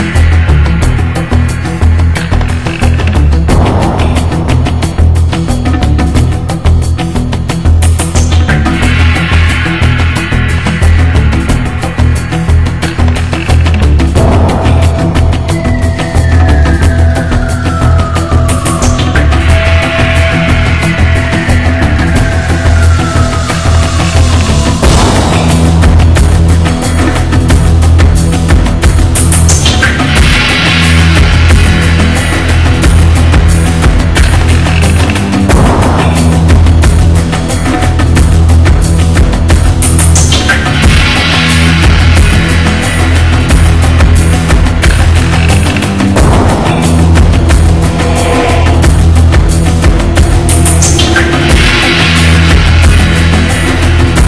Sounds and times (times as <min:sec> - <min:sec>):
Music: 0:00.0 - 0:54.2.